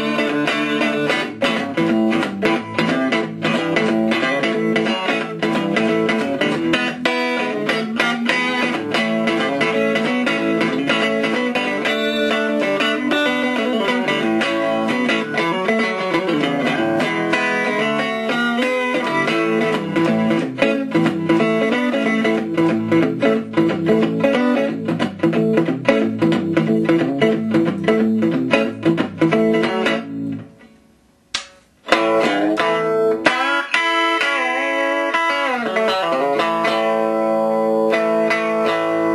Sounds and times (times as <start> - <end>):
Music: 0.0 - 39.1.